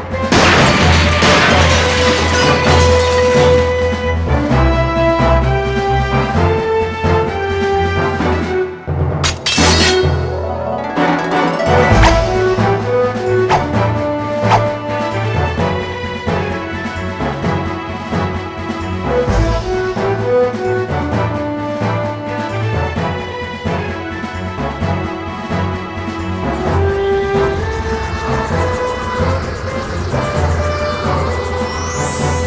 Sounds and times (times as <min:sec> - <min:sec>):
Music: 0:00.0 - 0:32.4.